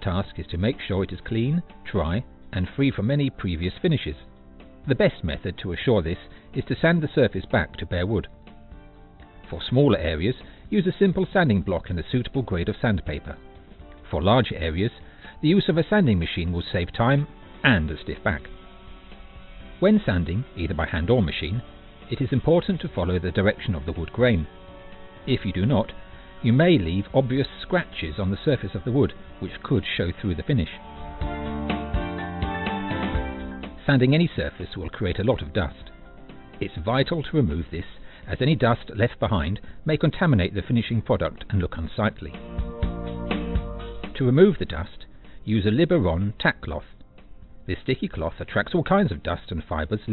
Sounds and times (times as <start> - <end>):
Speech: 0.0 - 4.2, 4.9 - 8.3, 9.5 - 13.4, 14.1 - 18.5, 19.8 - 24.5, 25.3 - 30.8, 33.8 - 35.9, 36.6 - 42.4, 44.2 - 46.9, 47.7 - 50.1
Music: 0.0 - 50.1.